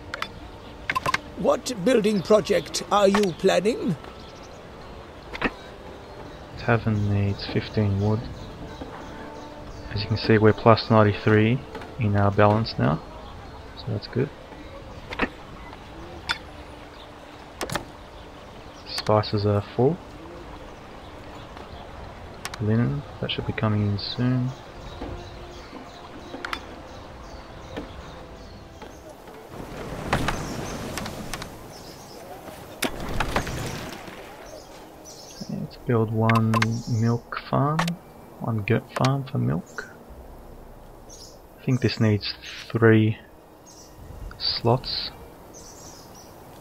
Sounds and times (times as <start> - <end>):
Environmental noise: 0.0 - 46.6.